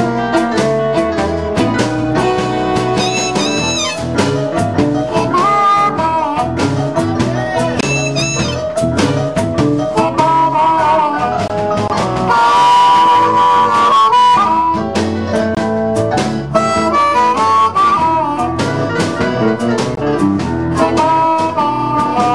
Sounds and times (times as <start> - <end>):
Blues: 0.0 - 22.3
Guitar: 0.0 - 22.3.